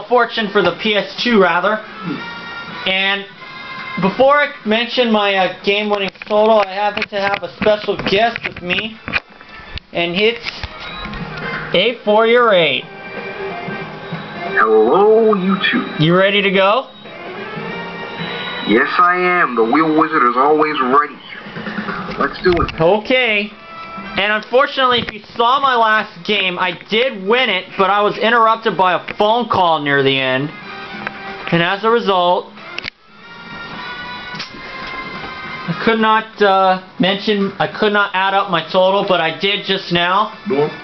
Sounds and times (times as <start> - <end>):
Speech: 0.0 - 1.8, 2.9 - 3.3, 4.0 - 9.0, 10.0 - 10.4, 11.8 - 12.9, 14.6 - 16.9, 18.7 - 21.2, 22.2 - 23.5, 24.2 - 30.5, 31.5 - 32.5, 35.7 - 40.8
Music: 0.0 - 40.8.